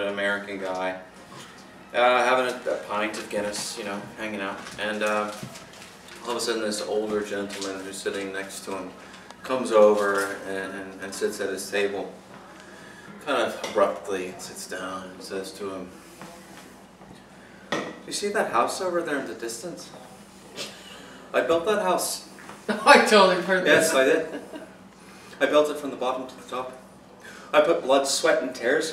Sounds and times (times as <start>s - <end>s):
Inside, small room: 0.0s - 28.9s
Speech: 2.0s - 5.5s, 6.2s - 12.2s, 18.1s - 20.1s, 25.4s - 26.8s, 27.6s - 28.9s.